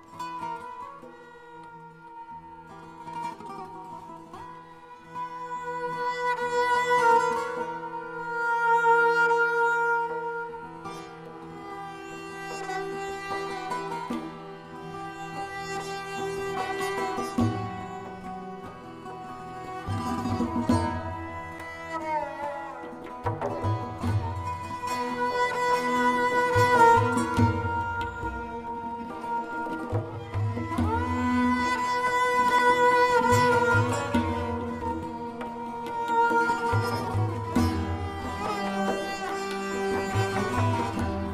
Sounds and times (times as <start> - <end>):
Tabla: 0.0 - 41.3.